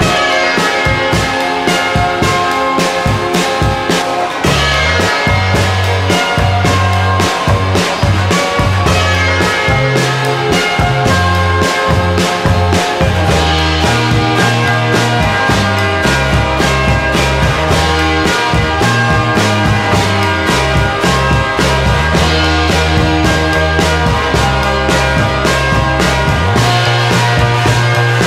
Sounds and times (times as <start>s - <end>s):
Music: 0.0s - 28.2s.